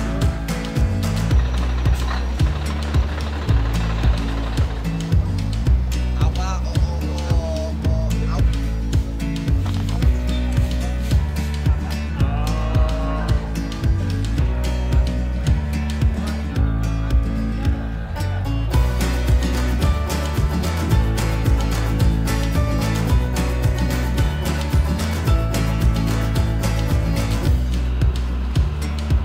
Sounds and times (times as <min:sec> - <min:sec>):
Music: 0:00.0 - 0:29.2.